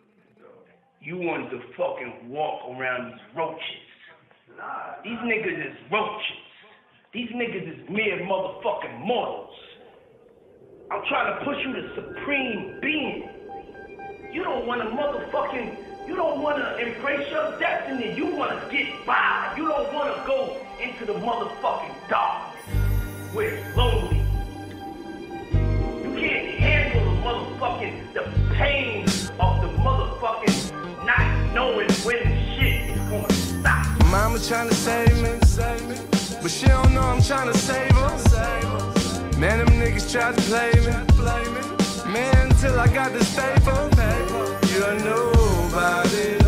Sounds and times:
Speech: 0.0s - 6.5s, 7.1s - 9.8s, 10.9s - 13.3s, 14.4s - 22.5s, 23.3s - 24.3s, 26.0s - 34.2s
Music: 12.6s - 46.4s.

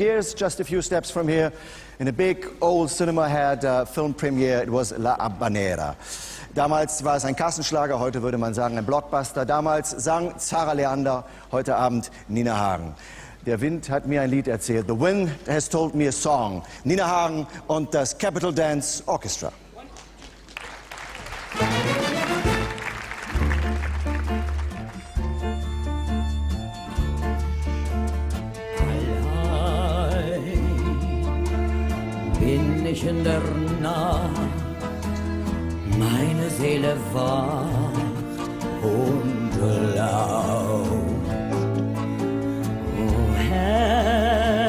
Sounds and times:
Music: 21.3s - 44.6s.

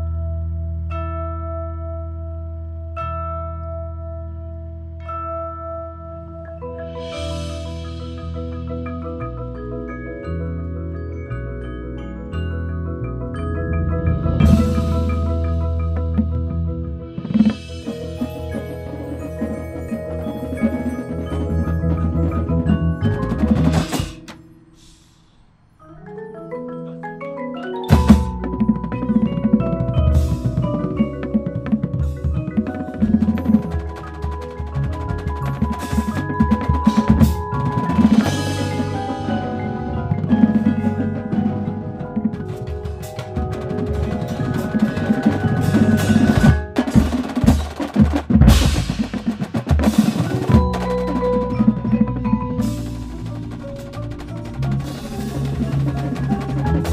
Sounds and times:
Wood block: 14.1s - 24.5s, 27.6s - 56.9s.

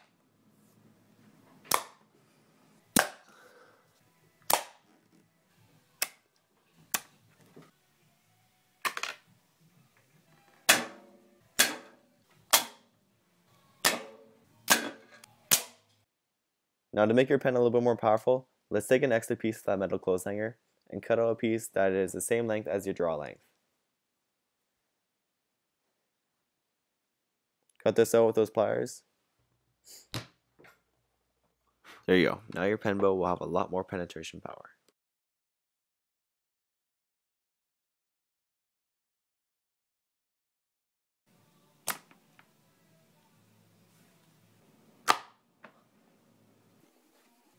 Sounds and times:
Arrow: 1.7s - 2.0s, 3.0s - 3.3s, 4.5s - 4.9s, 6.9s - 7.1s, 10.7s - 12.9s, 13.8s - 15.8s, 41.8s - 42.2s, 45.0s - 45.4s.

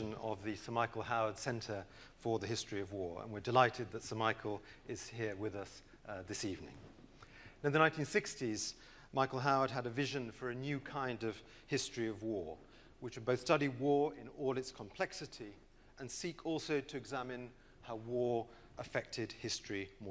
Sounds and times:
Speech: 0.0s - 6.8s, 7.6s - 20.1s.

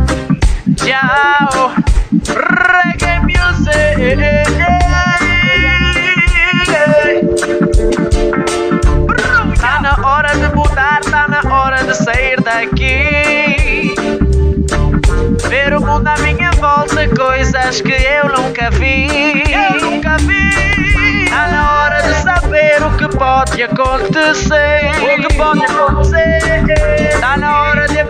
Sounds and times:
Reggae: 0.0s - 28.0s.

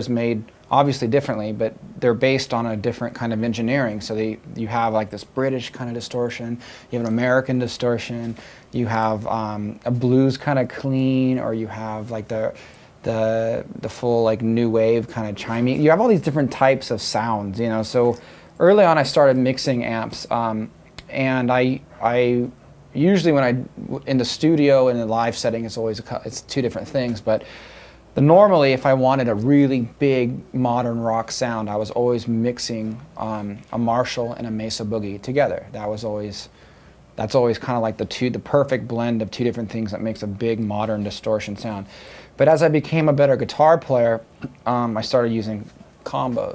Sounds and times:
Speech: 0.0s - 27.5s, 28.2s - 36.6s, 37.2s - 46.5s.

